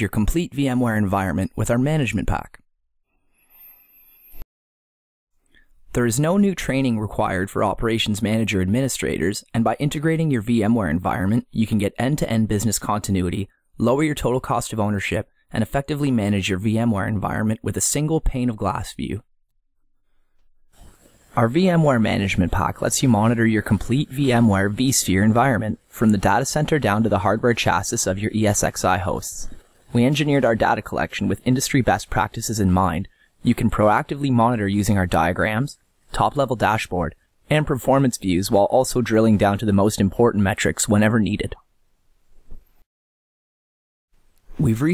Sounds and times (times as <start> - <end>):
Speech: 0.0 - 2.6, 5.9 - 19.3, 21.4 - 41.7, 44.6 - 44.9.